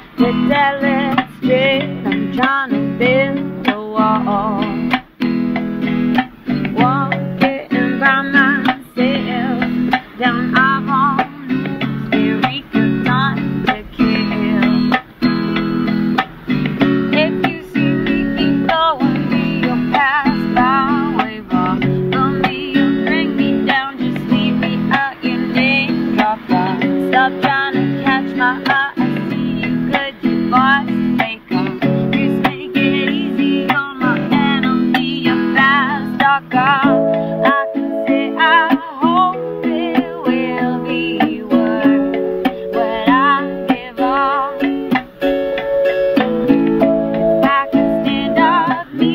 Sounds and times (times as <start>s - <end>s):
Music: 0.0s - 49.1s.